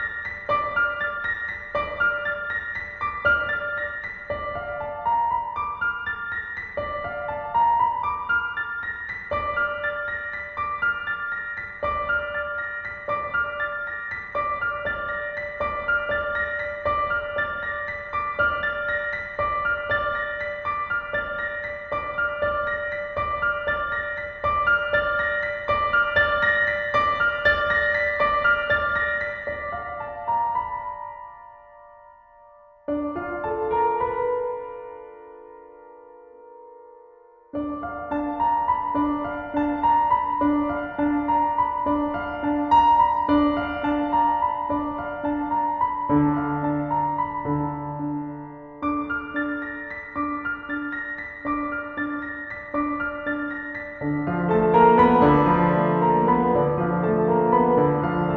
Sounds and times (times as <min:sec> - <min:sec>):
Music: 0:00.0 - 0:58.3.